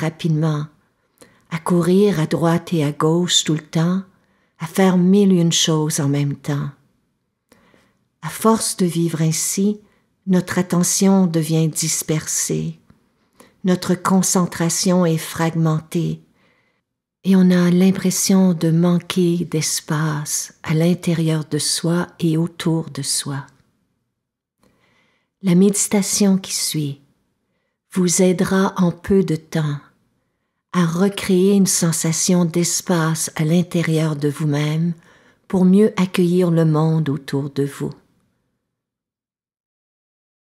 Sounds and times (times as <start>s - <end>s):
Speech: 0.0s - 0.8s, 1.5s - 6.8s, 8.2s - 12.8s, 13.6s - 16.2s, 17.3s - 23.6s, 25.4s - 27.1s, 27.9s - 30.0s, 30.8s - 38.1s.